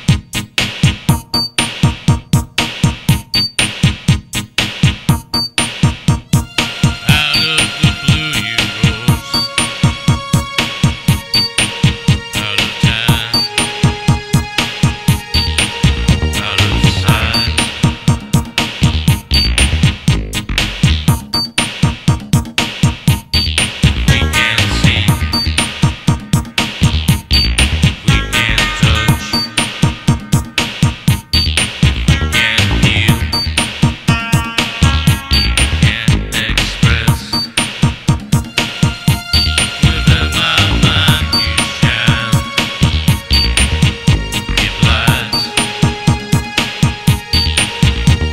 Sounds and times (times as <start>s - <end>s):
Music: 0.0s - 48.3s.